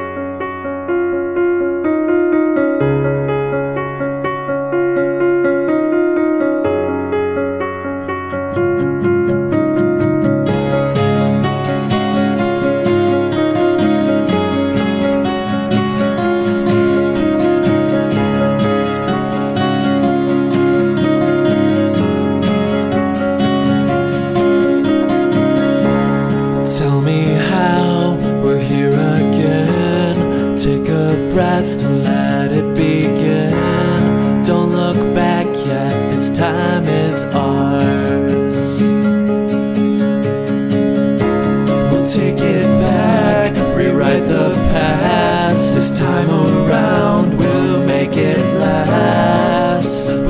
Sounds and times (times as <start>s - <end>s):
Tender music: 0.0s - 50.2s.